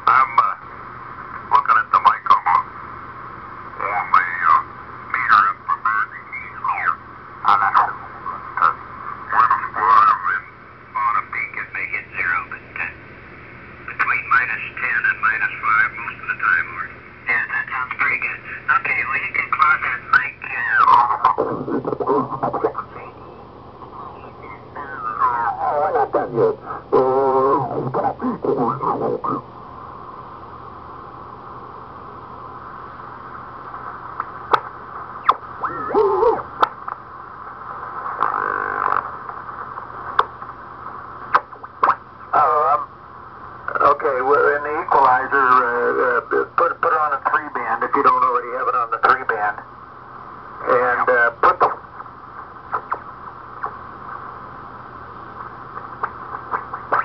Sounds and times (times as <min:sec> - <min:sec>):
Speech: 0:00.0 - 0:00.6, 0:01.5 - 0:02.7, 0:03.8 - 0:08.0, 0:08.6 - 0:13.0, 0:13.9 - 0:23.2, 0:24.4 - 0:29.4, 0:42.3 - 0:42.9, 0:43.7 - 0:49.7, 0:50.6 - 0:51.8
Radio: 0:00.0 - 0:00.7, 0:01.3 - 0:02.8, 0:03.7 - 0:13.1, 0:13.8 - 0:29.5, 0:33.0 - 0:43.0, 0:43.6 - 0:49.7, 0:50.6 - 0:54.4, 0:55.2 - 0:57.0.